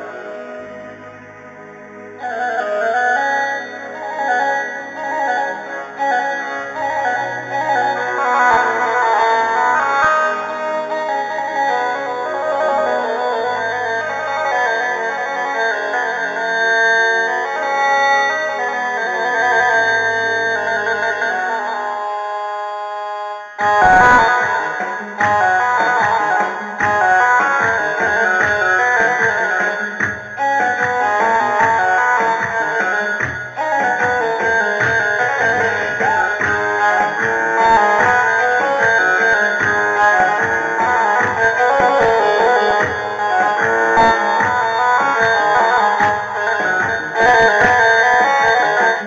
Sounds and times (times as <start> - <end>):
Sampler: 23.6 - 24.8.